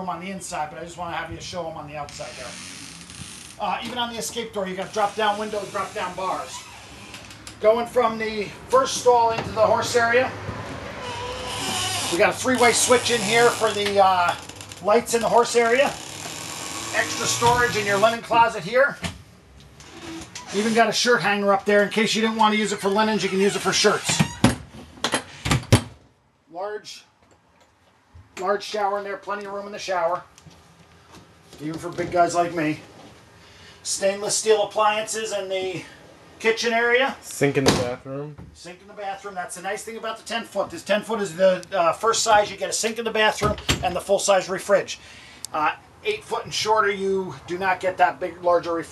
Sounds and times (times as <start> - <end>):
Speech: 0.0 - 2.6, 3.6 - 6.7, 7.6 - 10.4, 12.1 - 16.0, 16.9 - 19.0, 20.5 - 24.2, 26.5 - 27.1, 28.4 - 30.3, 31.6 - 32.9, 33.8 - 48.9.